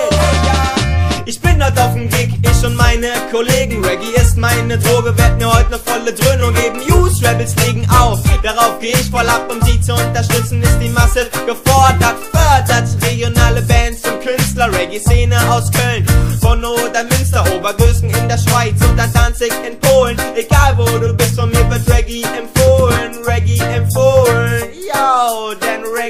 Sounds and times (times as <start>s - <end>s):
Reggae: 0.0s - 26.0s.